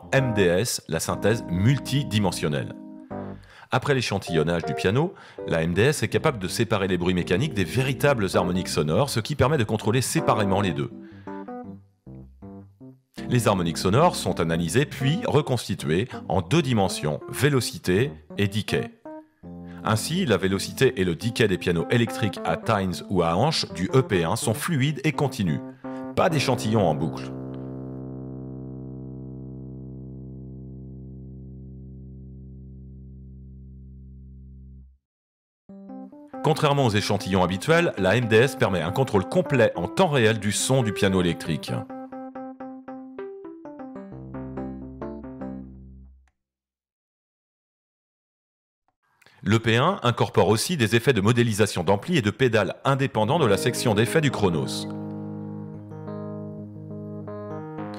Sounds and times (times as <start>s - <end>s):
Speech: 0.0s - 2.8s, 3.7s - 11.0s, 13.2s - 19.0s, 19.8s - 25.6s, 26.2s - 27.4s, 36.5s - 41.9s, 49.4s - 55.0s
Electric piano: 0.0s - 3.6s, 4.2s - 9.2s, 10.0s - 31.7s, 35.7s - 46.1s, 53.4s - 57.9s.